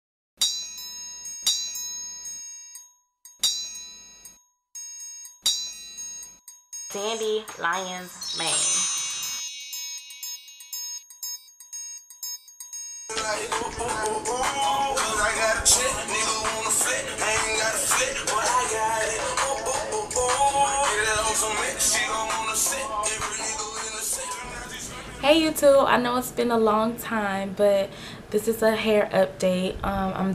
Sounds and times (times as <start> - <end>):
Speech: 6.9 - 8.8, 25.2 - 30.3.